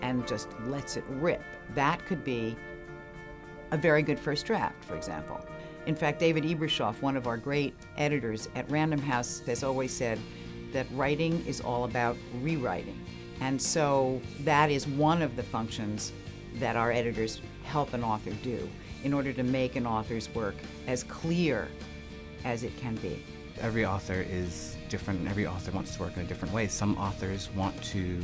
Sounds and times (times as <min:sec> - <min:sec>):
Music: 0:00.0 - 0:28.2.